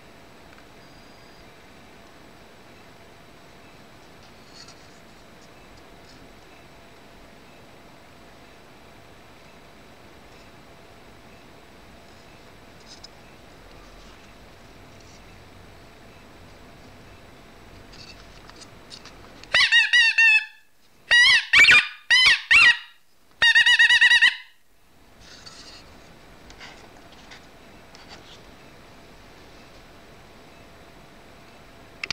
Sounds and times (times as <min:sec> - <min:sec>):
Inside, small room: 0:00.0 - 0:32.1.